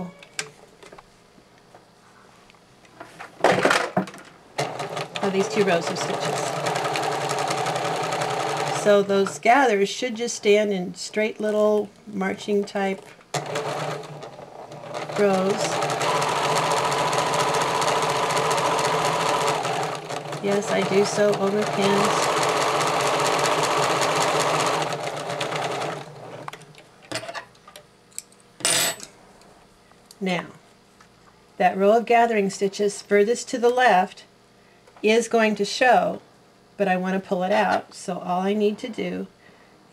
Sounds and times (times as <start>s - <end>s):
Sewing machine: 4.6s - 9.3s, 13.3s - 26.6s
Speech: 5.2s - 6.6s, 8.7s - 13.0s, 15.2s - 15.8s, 20.4s - 22.3s, 30.2s - 30.6s, 31.6s - 34.3s, 35.0s - 36.2s, 36.8s - 39.3s.